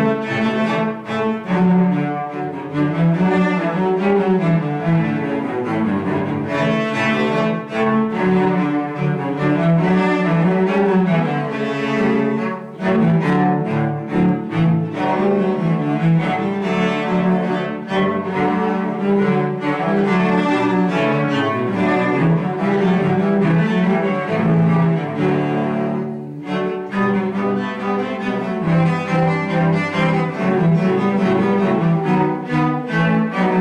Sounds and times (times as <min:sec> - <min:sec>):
Cello: 0:00.0 - 0:33.6.